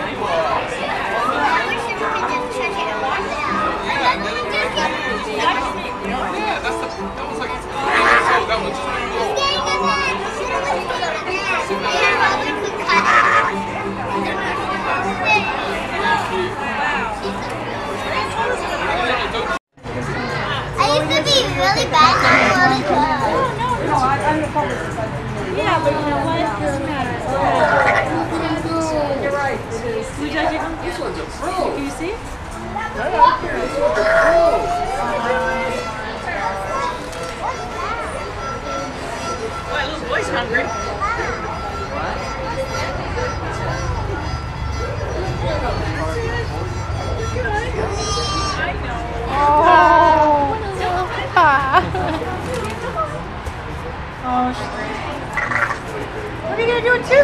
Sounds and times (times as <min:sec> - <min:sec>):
Music: 0:00.0 - 0:49.8
Speech: 0:00.0 - 0:57.2.